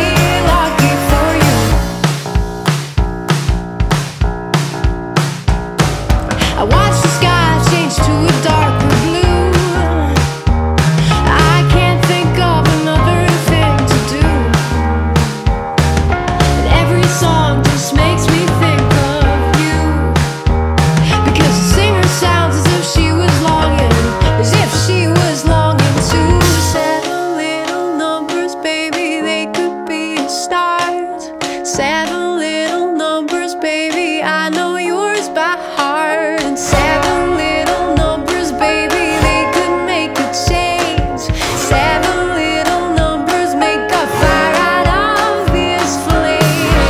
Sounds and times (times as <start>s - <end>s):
Independent music: 0.0s - 46.8s.